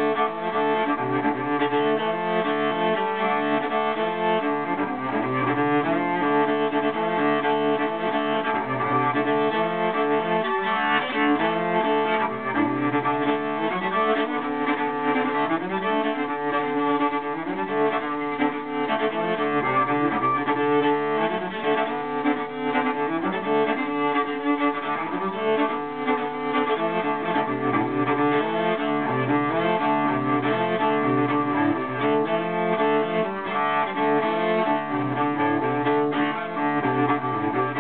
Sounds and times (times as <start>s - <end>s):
Cello: 0.0s - 37.8s.